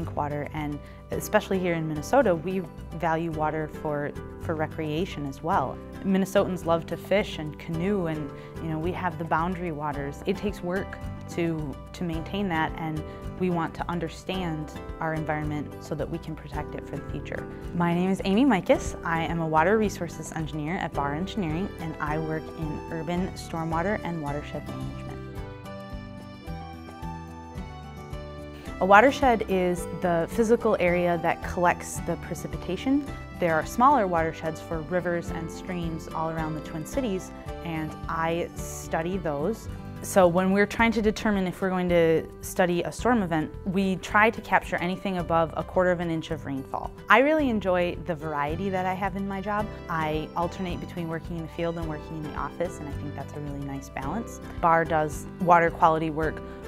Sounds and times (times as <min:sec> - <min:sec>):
Speech: 0:00.0 - 0:25.1, 0:28.8 - 0:56.4
Music: 0:00.0 - 0:56.6.